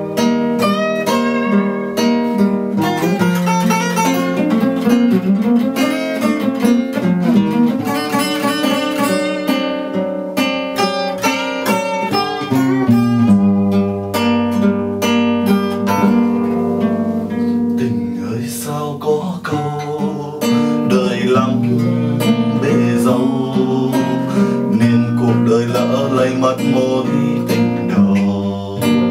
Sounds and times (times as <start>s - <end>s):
Acoustic guitar: 0.0s - 29.1s.